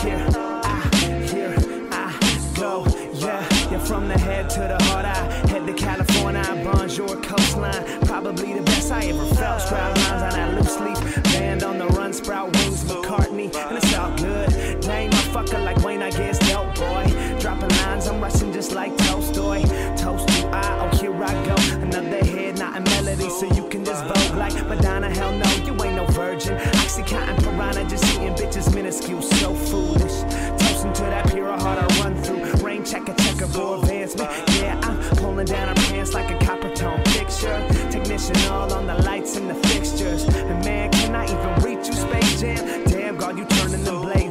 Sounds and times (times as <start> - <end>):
Music: 0.0 - 44.3.